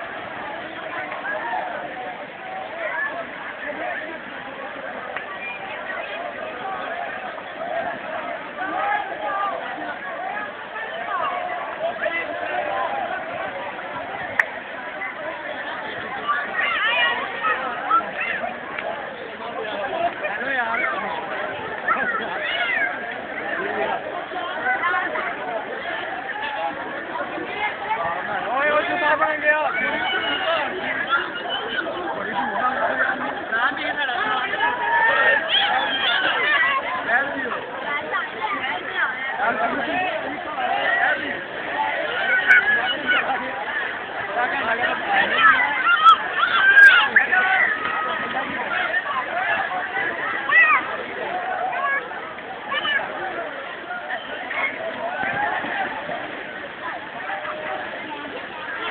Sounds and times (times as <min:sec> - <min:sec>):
Speech: 0:00.0 - 0:58.9.